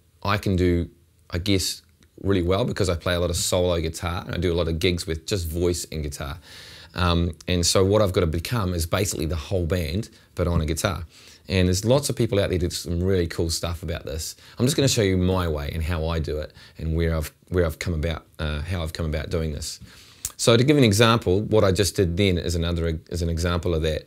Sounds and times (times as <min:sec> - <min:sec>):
Speech: 0:00.2 - 0:24.0.